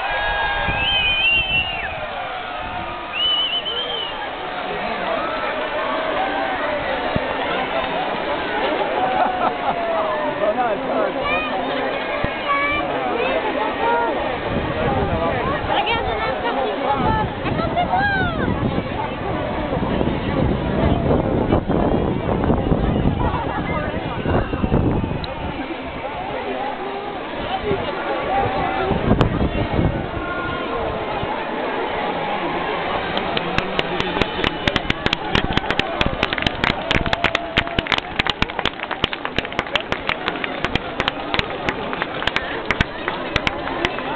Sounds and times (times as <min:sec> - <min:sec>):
Speech: 0:04.5 - 0:21.4, 0:22.3 - 0:35.0.